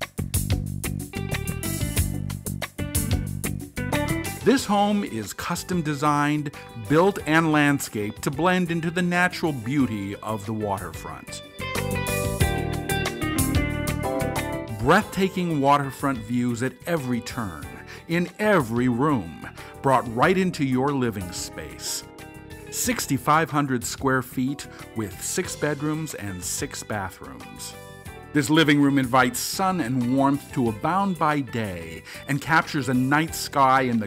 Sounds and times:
Music: 0.0 - 34.0
Speech: 4.5 - 11.4, 14.7 - 22.0, 22.7 - 27.8, 28.4 - 34.0.

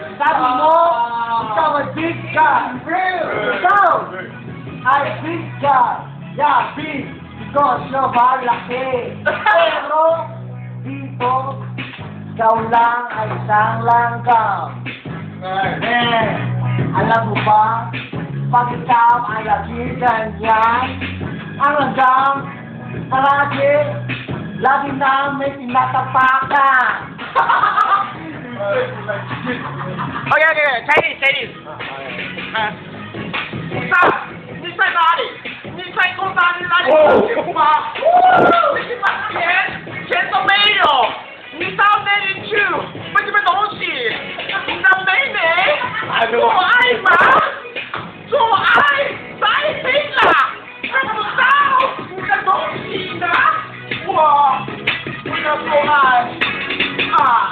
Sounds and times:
Music: 0.0 - 57.5
Inside, large room or hall: 30.6 - 57.5.

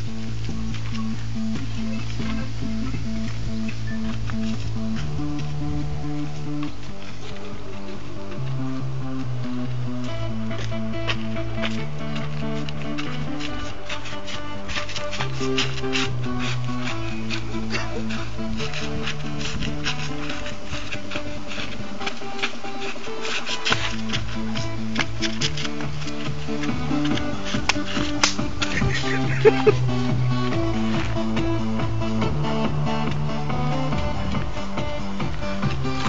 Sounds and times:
Techno: 0.0 - 36.0.

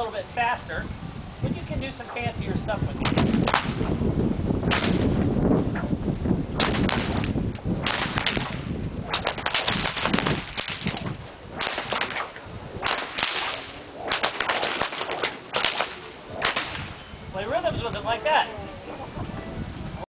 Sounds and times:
Whip: 3.0 - 3.9, 4.7 - 5.1, 6.6 - 17.0.

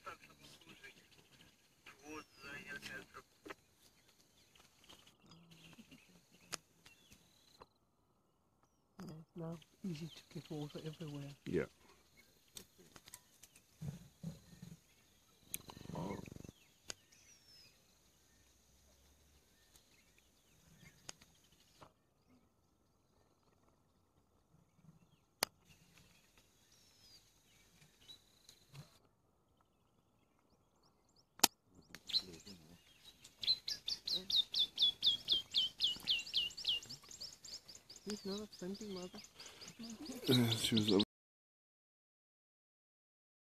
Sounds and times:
Chirp, tweet: 0.0 - 7.8, 8.6 - 24.0, 24.6 - 41.0
Outside, rural or natural: 0.0 - 41.1.

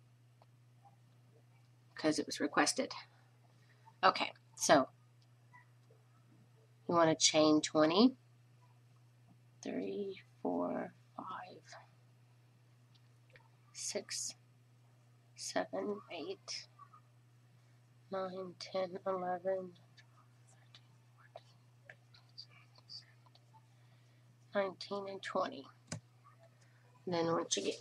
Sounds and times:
Inside, small room: 0.0 - 27.8
Speech: 2.0 - 3.0, 4.0 - 4.9, 6.9 - 8.2, 9.6 - 11.8, 13.8 - 14.3, 15.4 - 16.7, 18.1 - 19.8, 24.6 - 25.7, 27.0 - 27.8.

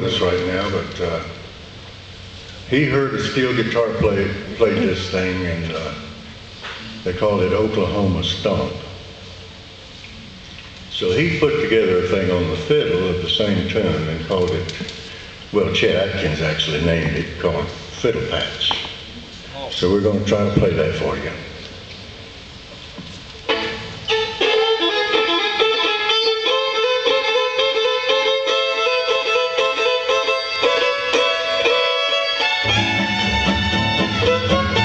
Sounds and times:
Violin, fiddle: 23.5 - 34.8.

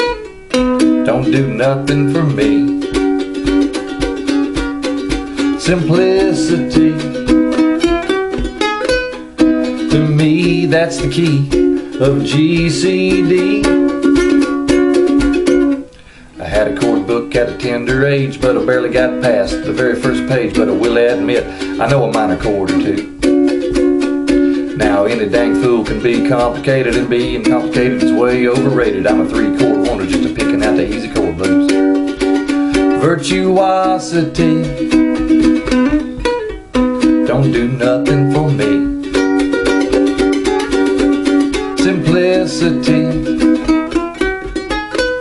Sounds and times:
Inside, small room: 0.0 - 45.2
Ukulele: 0.0 - 45.2.

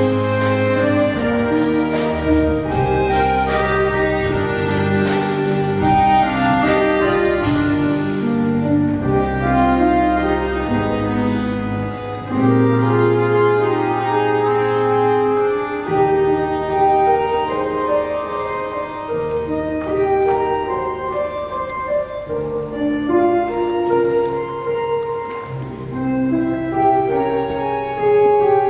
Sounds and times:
Percussion: 0.0 - 9.4
Accordion: 0.0 - 28.6
Classical music: 0.0 - 28.6
Orchestra: 0.0 - 28.6.

